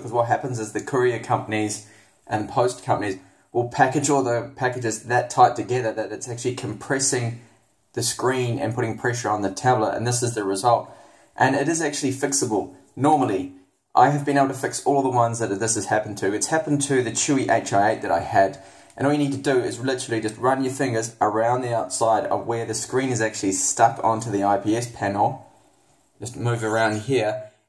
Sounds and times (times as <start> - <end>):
Speech: 0.0 - 25.5, 26.2 - 27.6.